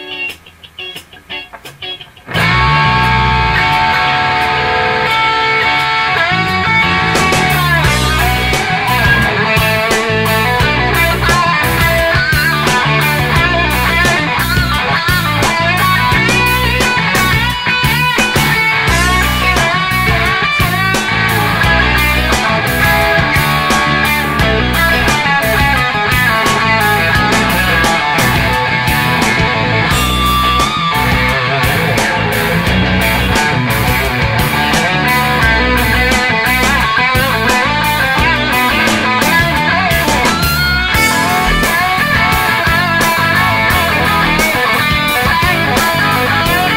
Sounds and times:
Progressive rock: 0:00.0 - 0:46.7.

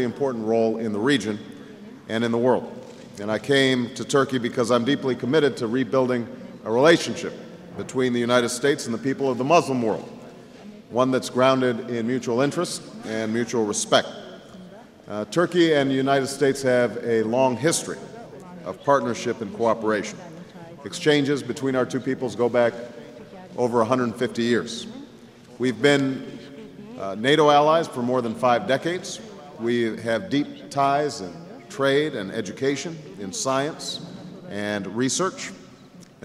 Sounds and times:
Speech: 0:00.0 - 0:35.6.

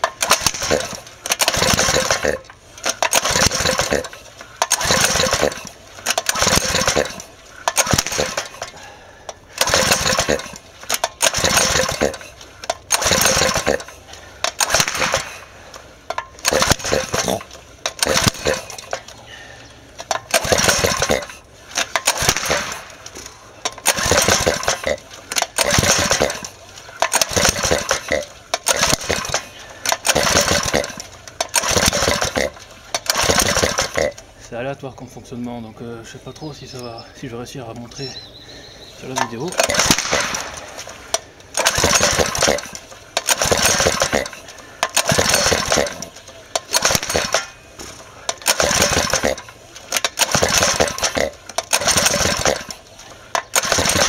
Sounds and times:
Ratchet, pawl: 0:00.0 - 0:15.5, 0:16.1 - 0:19.1, 0:20.0 - 0:22.9, 0:23.6 - 0:34.2, 0:39.2 - 0:47.6, 0:48.3 - 0:54.0
Gears: 0:00.0 - 0:19.2, 0:20.0 - 0:34.3, 0:39.0 - 0:54.0.

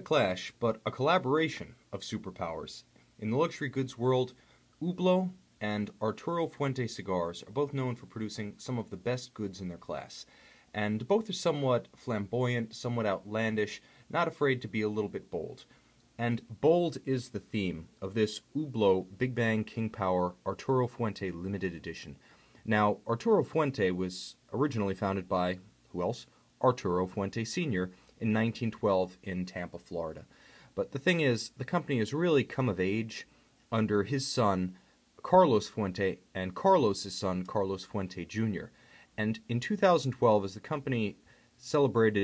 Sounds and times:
Speech: 0:00.0 - 0:42.2.

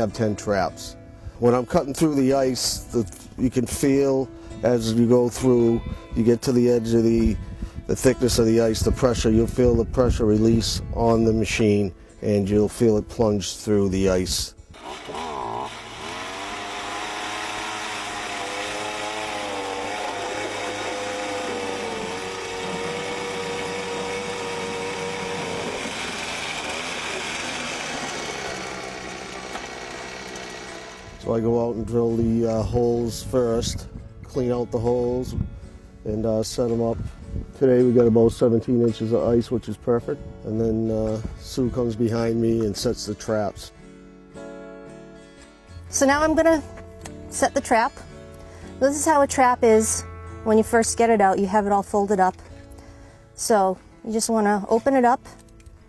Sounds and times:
Speech: 0:00.0 - 0:14.5, 0:31.2 - 0:35.4, 0:36.1 - 0:37.0, 0:37.6 - 0:43.7, 0:53.4 - 0:55.3
Music: 0:00.0 - 0:14.8, 0:30.6 - 0:55.8
Outside, rural or natural: 0:00.0 - 0:55.8.

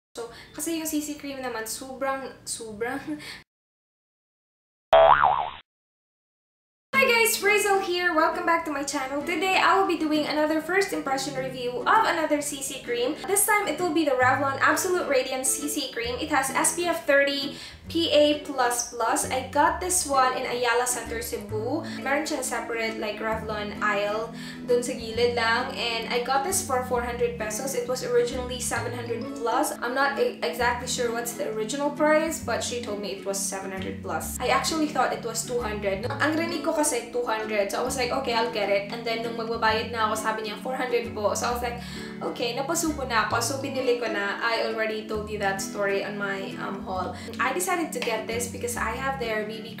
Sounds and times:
Speech: 0:00.2 - 0:03.3, 0:07.0 - 0:49.8
Music: 0:00.2 - 0:03.4, 0:07.0 - 0:49.8.

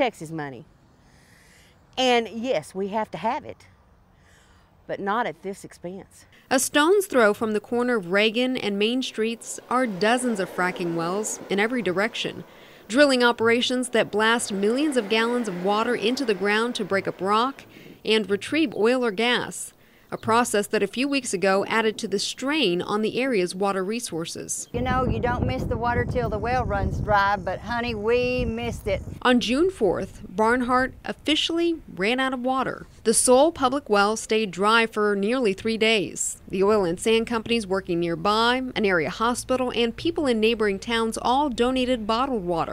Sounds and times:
Speech: 0:00.0 - 0:00.6, 0:02.0 - 0:03.7, 0:04.9 - 0:42.7.

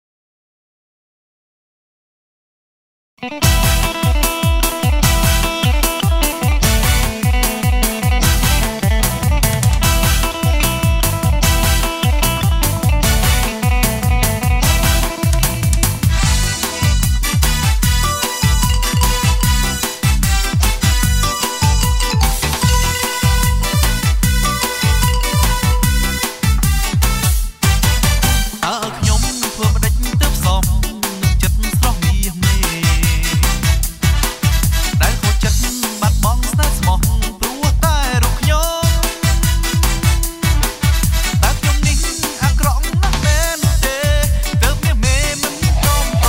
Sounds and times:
Tender music: 0:03.3 - 0:31.9, 0:32.6 - 0:46.2.

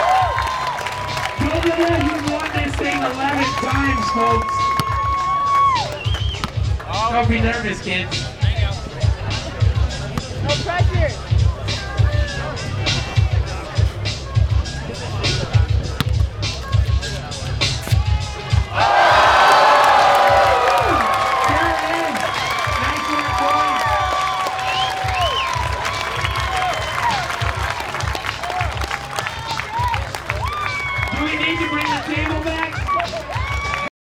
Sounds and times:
Music: 0:00.0 - 0:33.9
Speech: 0:01.4 - 0:04.4, 0:06.9 - 0:09.1, 0:31.1 - 0:32.8.

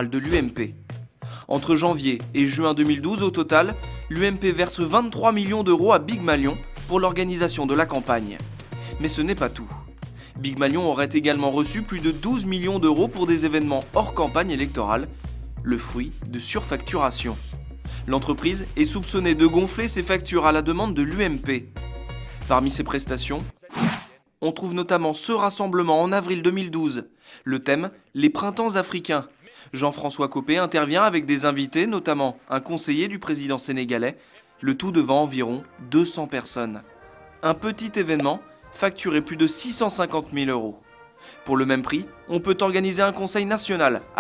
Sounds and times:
Speech: 0:00.0 - 0:00.8, 0:01.5 - 0:17.5, 0:18.1 - 0:21.7, 0:22.4 - 0:40.8, 0:41.5 - 0:44.2
Music: 0:00.0 - 0:23.6, 0:29.0 - 0:44.2.

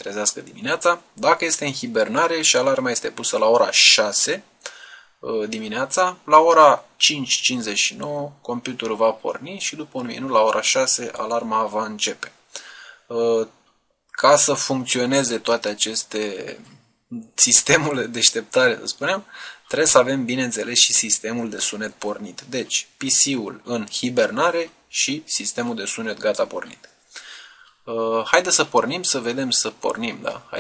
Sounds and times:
Speech: 0:00.0 - 0:04.5, 0:05.2 - 0:12.4, 0:13.1 - 0:13.6, 0:14.2 - 0:26.9, 0:27.9 - 0:30.6.

